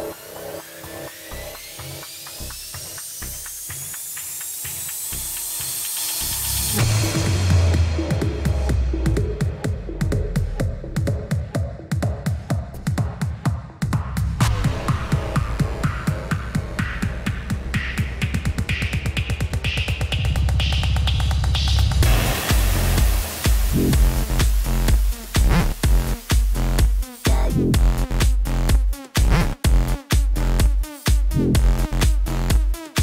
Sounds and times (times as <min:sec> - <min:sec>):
Music: 0:00.0 - 0:33.0.